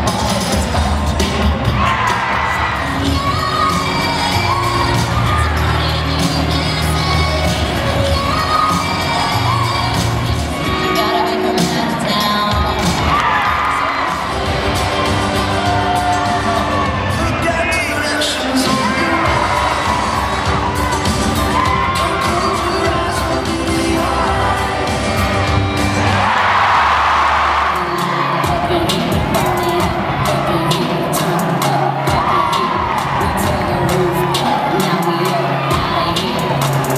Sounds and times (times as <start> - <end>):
Music: 0.0 - 36.9.